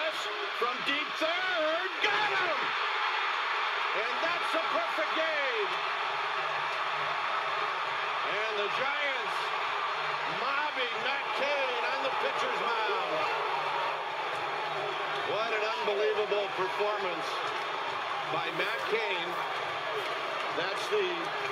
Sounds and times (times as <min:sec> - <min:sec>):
Speech: 0:00.0 - 0:02.7, 0:04.0 - 0:05.8, 0:08.3 - 0:09.4, 0:10.3 - 0:13.3, 0:15.3 - 0:17.4, 0:18.3 - 0:19.4, 0:20.6 - 0:21.4.